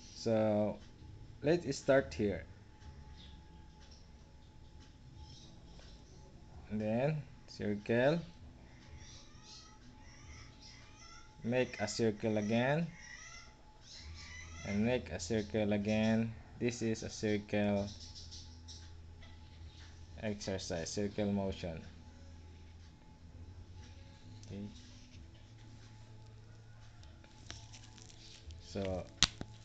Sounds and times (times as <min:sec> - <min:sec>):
Inside, small room: 0:00.0 - 0:29.6
Speech: 0:11.4 - 0:13.0, 0:14.6 - 0:17.9, 0:20.2 - 0:21.9, 0:28.6 - 0:29.1.